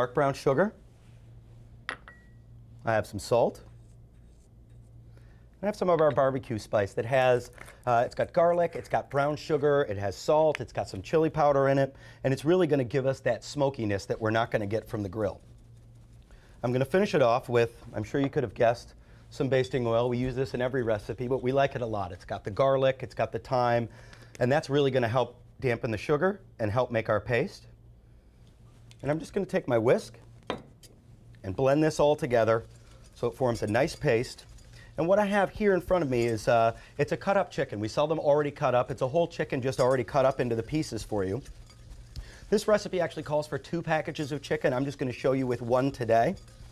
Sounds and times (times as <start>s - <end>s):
Speech: 0.0s - 0.8s, 2.8s - 3.7s, 5.6s - 15.4s, 16.6s - 27.7s, 29.0s - 30.2s, 31.4s - 34.4s, 35.0s - 41.5s, 42.5s - 46.4s.